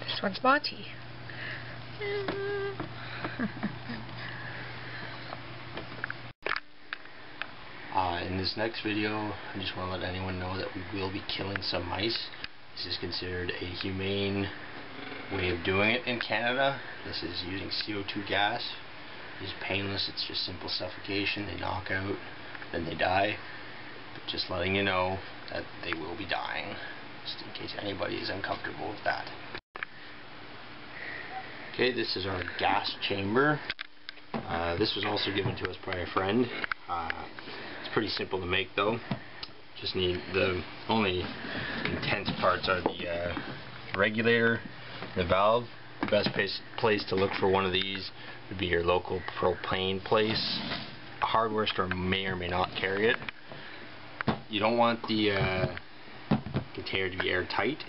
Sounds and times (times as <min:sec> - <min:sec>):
Speech: 0:07.9 - 0:14.6, 0:15.3 - 0:18.8, 0:19.4 - 0:23.4, 0:24.3 - 0:29.4, 0:31.8 - 0:33.7, 0:34.4 - 0:37.3, 0:37.9 - 0:39.1, 0:39.8 - 0:53.3, 0:54.5 - 0:55.8, 0:56.7 - 0:57.8.